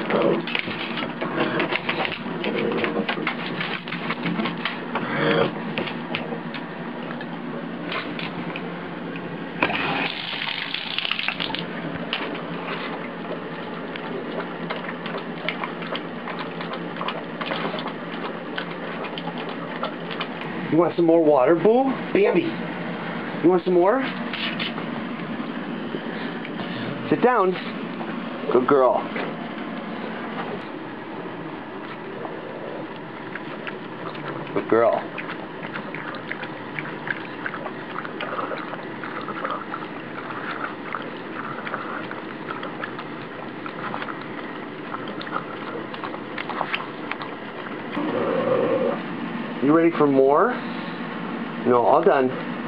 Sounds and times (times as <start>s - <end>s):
Gush: 9.6s - 11.7s.